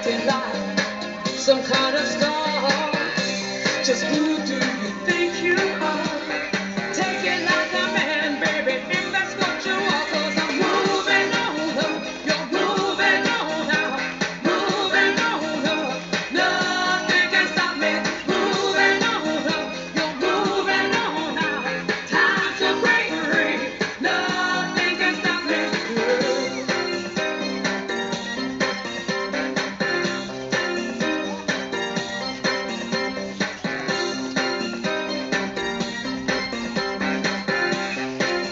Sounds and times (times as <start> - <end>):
Singing: 0.0 - 27.0
Music: 0.0 - 38.5.